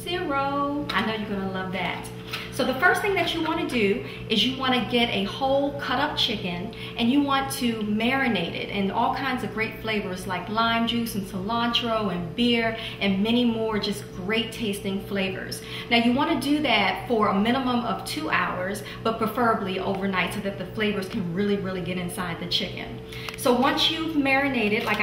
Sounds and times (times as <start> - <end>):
Speech: 0.0 - 25.0.